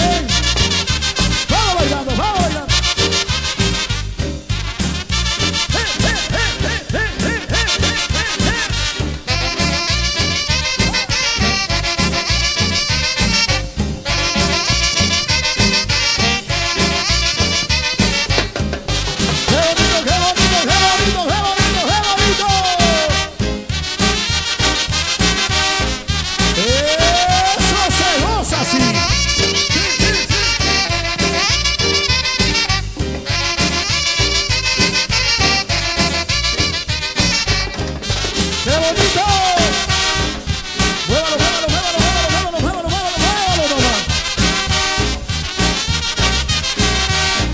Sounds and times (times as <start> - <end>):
Music: 0.0 - 47.5.